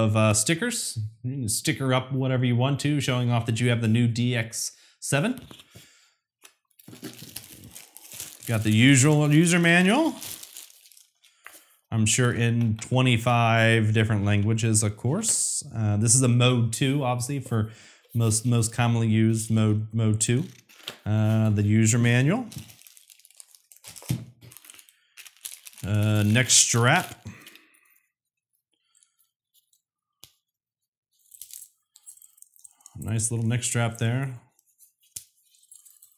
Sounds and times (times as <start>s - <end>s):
Speech: 0.0s - 5.5s, 8.5s - 10.2s, 11.9s - 22.6s, 25.8s - 27.3s, 33.0s - 34.5s
Crumpling, crinkling: 6.4s - 11.7s, 20.4s - 28.0s, 34.6s - 36.1s.